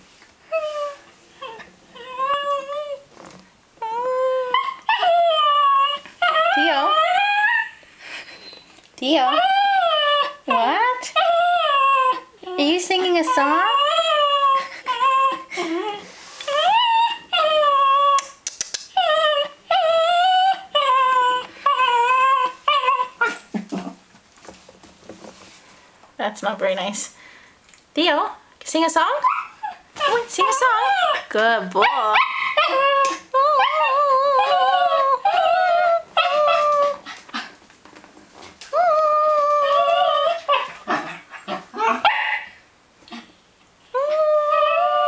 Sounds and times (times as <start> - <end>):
Whimper: 0.5 - 3.1, 3.8 - 24.0, 29.2 - 37.5, 38.7 - 42.5, 43.9 - 45.0
Speech: 6.6 - 7.1, 9.0 - 9.5, 10.5 - 11.2, 12.5 - 13.9, 26.2 - 27.2, 28.0 - 29.3, 30.0 - 32.2.